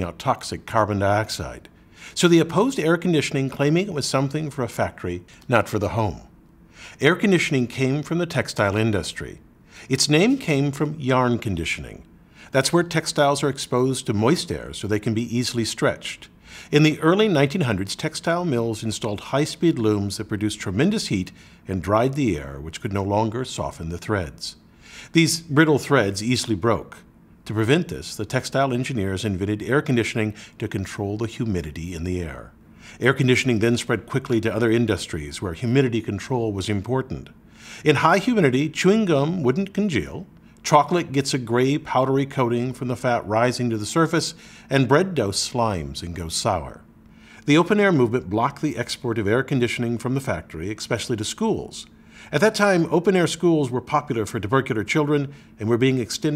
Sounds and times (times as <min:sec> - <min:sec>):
Speech: 0:00.0 - 0:06.3, 0:07.0 - 0:56.3.